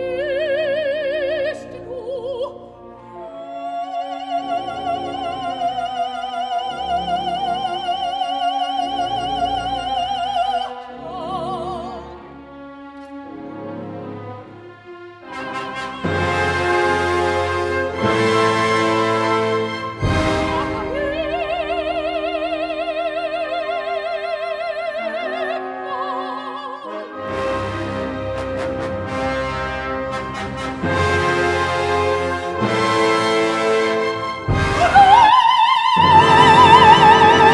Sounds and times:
Opera: 0:00.0 - 0:37.5.

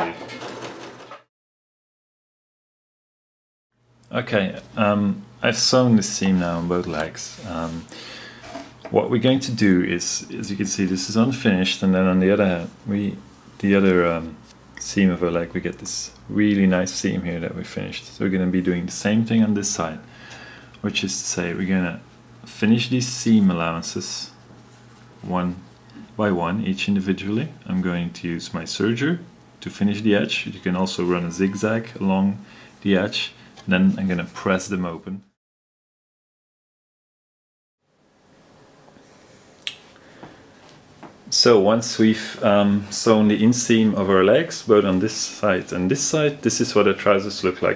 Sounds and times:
Speech: 0:04.1 - 0:07.9, 0:08.8 - 0:20.1, 0:20.8 - 0:24.4, 0:25.2 - 0:35.4, 0:41.3 - 0:47.7.

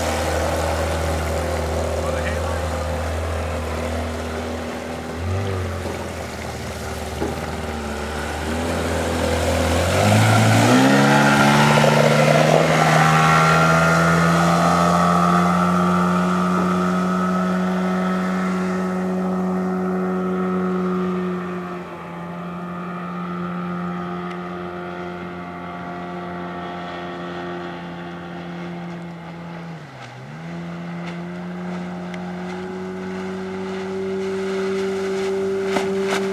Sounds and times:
Motorboat, speedboat: 0:00.0 - 0:36.3.

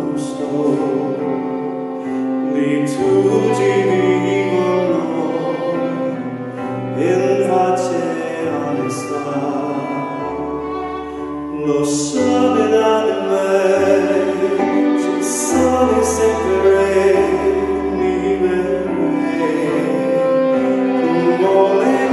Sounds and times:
Violin, fiddle: 0:00.0 - 0:22.1.

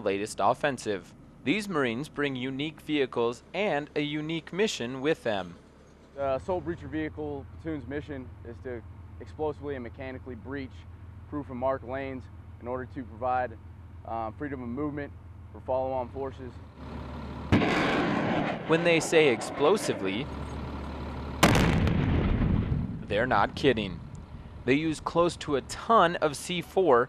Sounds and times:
Speech: 0:00.0 - 0:05.6, 0:06.2 - 0:16.6, 0:18.7 - 0:20.3, 0:23.1 - 0:24.0, 0:24.7 - 0:27.0.

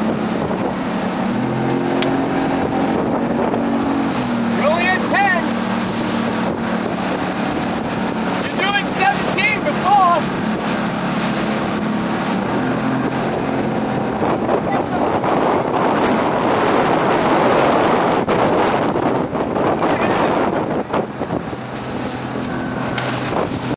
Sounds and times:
Sailboat, sailing ship: 0:00.0 - 0:23.7.

